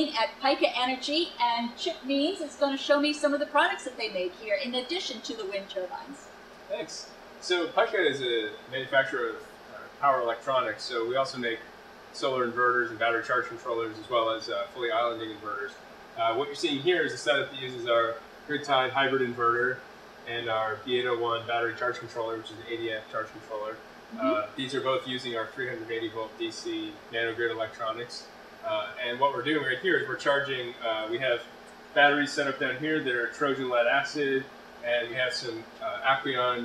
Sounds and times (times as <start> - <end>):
Speech: 0.0 - 31.4, 32.0 - 36.6.